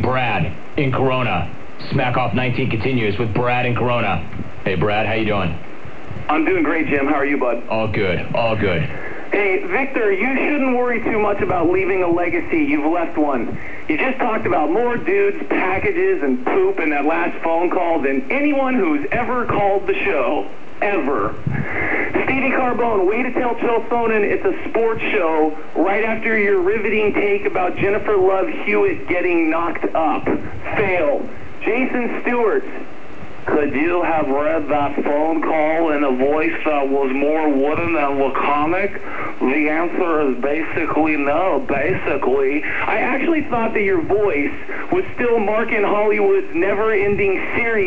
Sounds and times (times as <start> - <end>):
Speech: 0.0 - 21.5, 22.1 - 47.8.